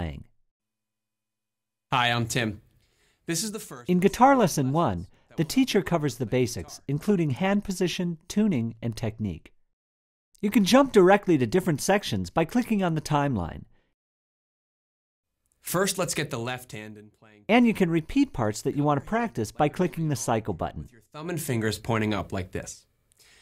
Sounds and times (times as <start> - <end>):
Speech: 2.0 - 2.6, 3.3 - 9.5, 10.4 - 13.7, 15.7 - 22.9.